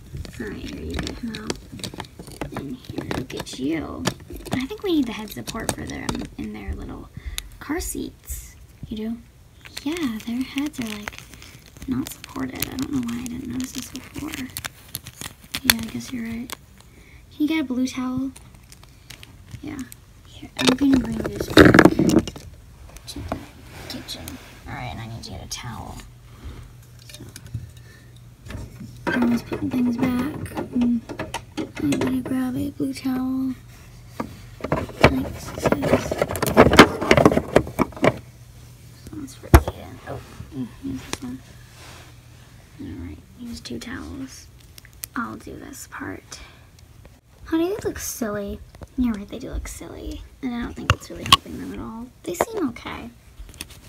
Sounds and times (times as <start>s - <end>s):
Inside, small room: 0.0s - 53.8s
Speech: 0.3s - 1.6s, 2.4s - 11.1s, 11.8s - 14.6s, 15.6s - 16.6s, 17.3s - 18.4s, 19.6s - 22.2s, 23.1s - 26.1s, 29.1s - 31.1s, 31.8s - 33.6s, 34.9s - 36.2s, 39.1s - 41.4s, 42.8s - 44.5s, 45.2s - 46.6s, 47.4s - 53.2s.